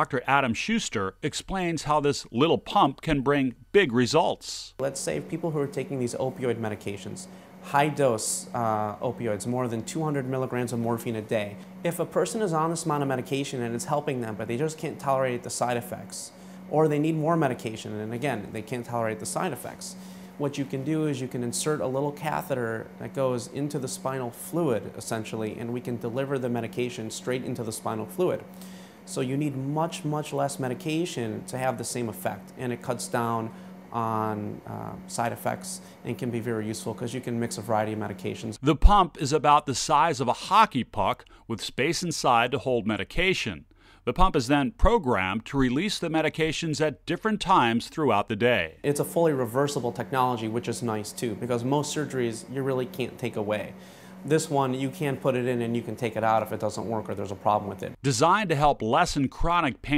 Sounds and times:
Speech: 0.0s - 28.5s, 29.1s - 59.9s.

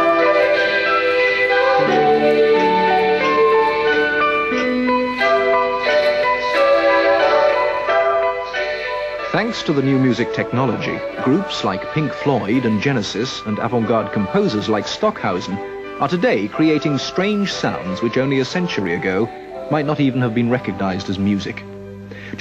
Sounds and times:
Tender music: 0.0s - 22.4s
Speech: 9.3s - 21.6s.

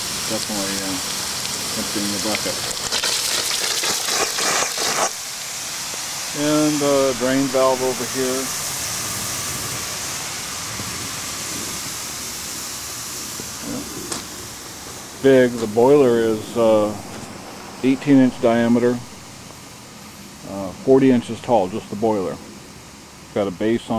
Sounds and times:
Steam: 0.0s - 23.9s
Speech: 0.3s - 1.0s, 1.7s - 2.6s, 6.4s - 8.5s, 13.6s - 13.9s, 15.2s - 17.0s, 17.8s - 19.1s, 20.4s - 22.4s, 23.3s - 23.9s.

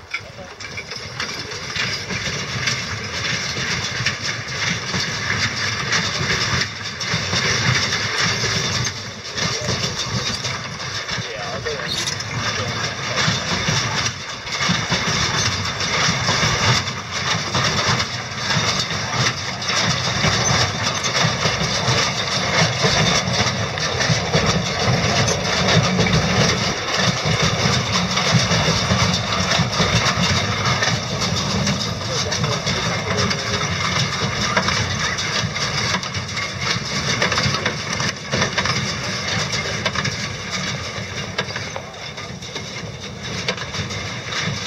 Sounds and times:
Clip-clop: 0.0s - 44.6s
Speech: 0.1s - 1.9s, 9.2s - 14.0s, 31.6s - 35.4s, 41.0s - 42.8s.

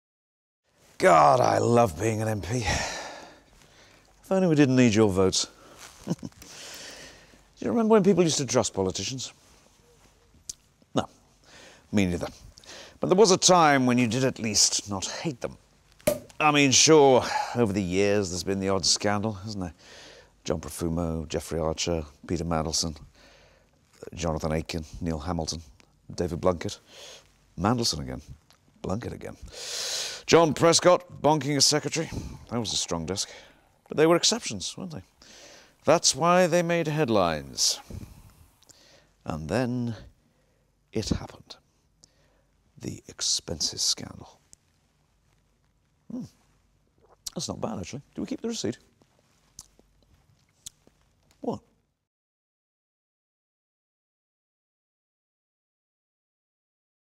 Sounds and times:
Speech: 1.0s - 3.0s, 4.2s - 5.6s, 7.6s - 9.4s, 11.9s - 12.4s, 13.0s - 15.6s, 16.4s - 19.8s, 20.4s - 23.1s, 24.0s - 26.8s, 27.6s - 29.4s, 30.3s - 35.1s, 35.8s - 37.9s, 39.2s - 40.1s, 41.0s - 41.6s, 42.8s - 44.4s, 46.1s - 46.4s, 47.3s - 48.9s, 51.4s - 51.7s.

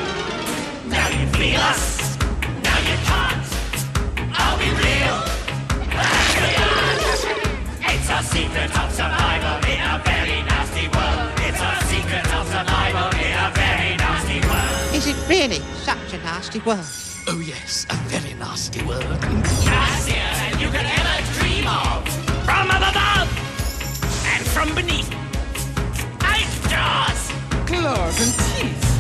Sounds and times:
Music: 0.0s - 29.0s.

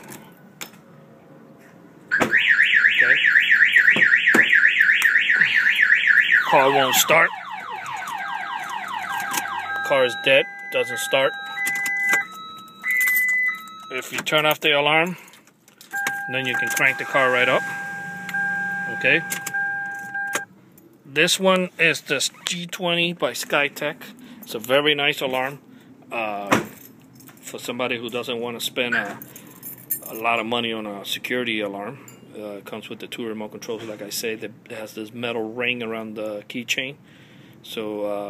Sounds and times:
Car alarm: 2.1s - 14.2s, 16.0s - 20.5s.

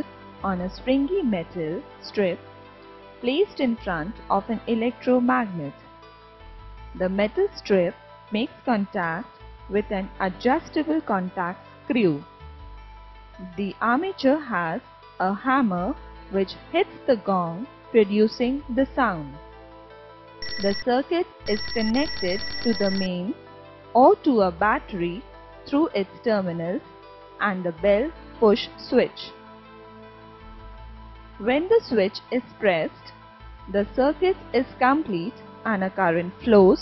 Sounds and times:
Speech: 0.0s - 2.4s, 3.2s - 5.7s, 7.0s - 12.3s, 13.4s - 19.4s, 20.6s - 23.4s, 24.0s - 26.8s, 27.4s - 29.3s, 31.4s - 33.1s, 33.7s - 36.8s
Music: 0.0s - 36.8s.

